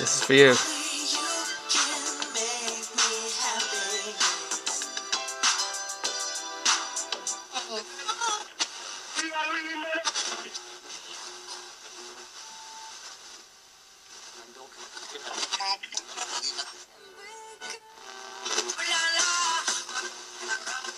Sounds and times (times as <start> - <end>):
Radio: 0.0 - 4.4, 7.5 - 20.9
Music: 0.0 - 10.4, 17.0 - 20.9.